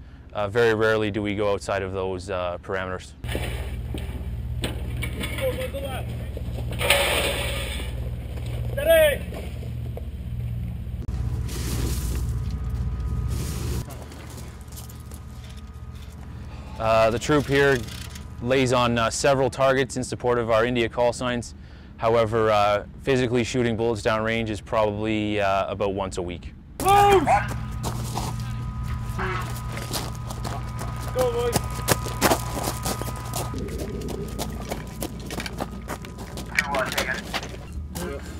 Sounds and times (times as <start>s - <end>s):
Speech: 0.4s - 3.2s, 18.4s - 27.4s, 36.5s - 37.3s.